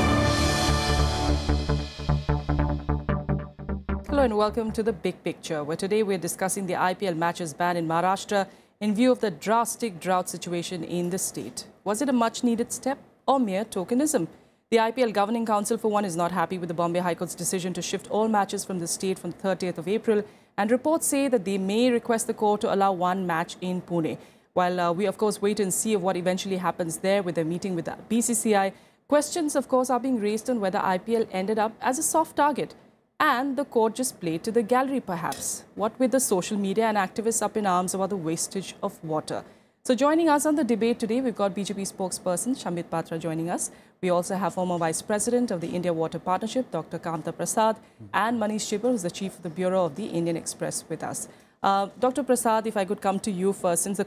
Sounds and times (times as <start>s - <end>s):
Speech: 4.1s - 54.0s.